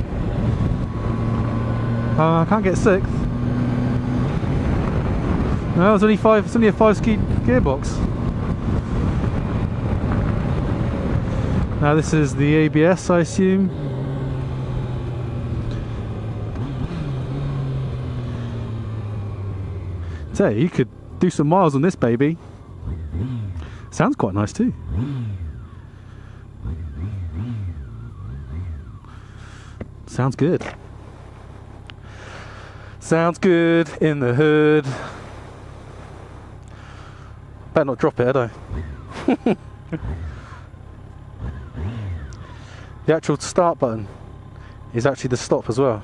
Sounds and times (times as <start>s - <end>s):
Motorcycle: 0.0s - 46.0s
Outside, rural or natural: 0.0s - 46.0s
Speech: 2.2s - 3.2s, 5.8s - 8.0s, 11.8s - 13.7s, 20.3s - 22.4s, 23.9s - 24.8s, 30.1s - 30.8s, 33.0s - 35.2s, 37.8s - 38.6s, 43.1s - 44.1s, 44.9s - 46.0s.